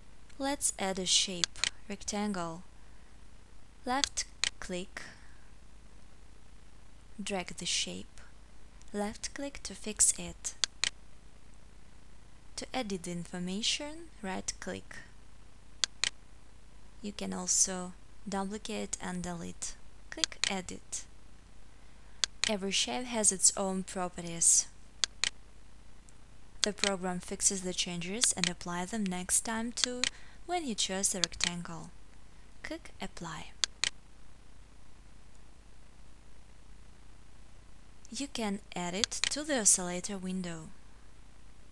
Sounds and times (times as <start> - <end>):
Speech: 0.4 - 2.7, 3.9 - 5.2, 7.2 - 8.3, 8.9 - 10.6, 12.6 - 15.1, 17.0 - 21.1, 22.5 - 24.8, 26.6 - 32.0, 32.6 - 33.6, 38.1 - 40.8.